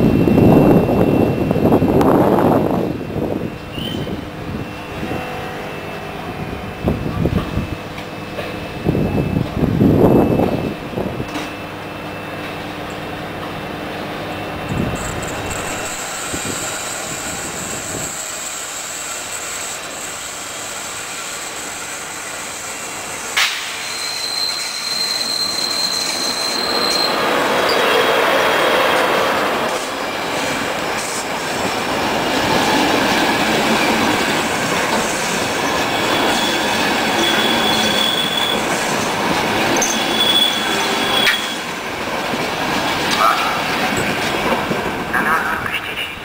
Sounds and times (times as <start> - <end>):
Railroad car, train wagon: 0.0 - 46.2
Train: 0.0 - 46.2.